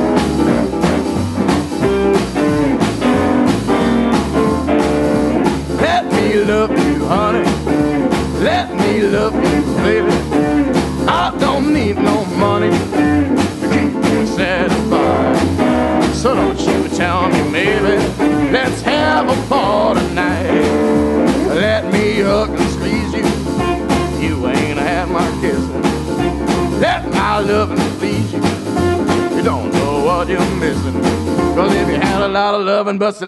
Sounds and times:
Music: 0:00.0 - 0:33.0.

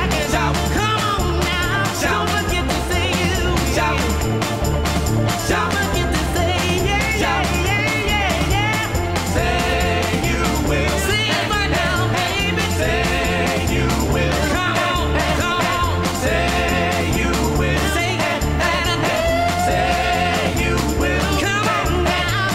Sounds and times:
Music: 0:00.0 - 0:22.5.

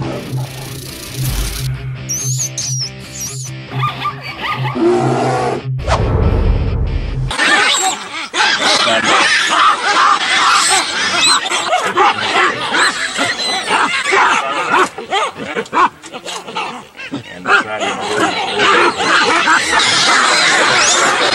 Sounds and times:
Animal: 0:07.4 - 0:21.3.

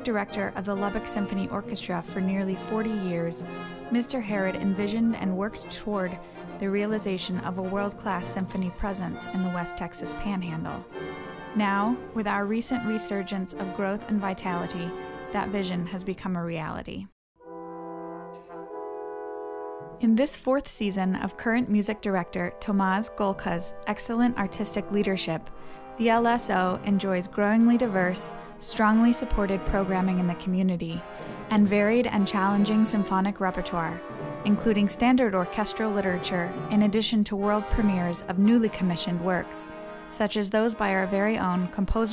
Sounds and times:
Speech: 0:00.0 - 0:10.8, 0:11.6 - 0:17.1, 0:20.0 - 0:39.6, 0:40.2 - 0:42.1
Orchestra: 0:00.0 - 0:16.1, 0:17.4 - 0:20.0, 0:21.0 - 0:42.1.

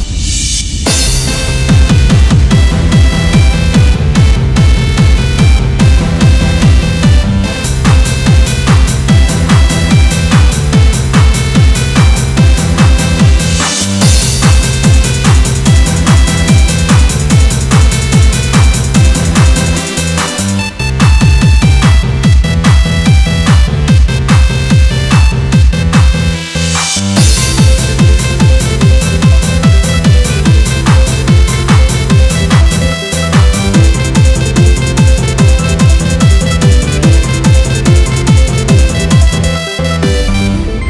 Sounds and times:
Techno: 0:00.0 - 0:40.9.

